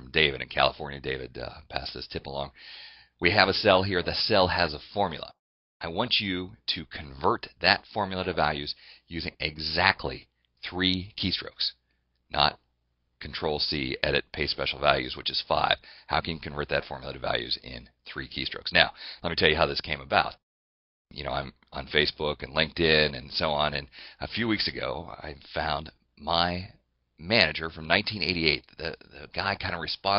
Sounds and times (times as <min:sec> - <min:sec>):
Speech: 0:00.0 - 0:02.6, 0:03.2 - 0:12.6, 0:13.2 - 0:20.4, 0:21.1 - 0:30.1.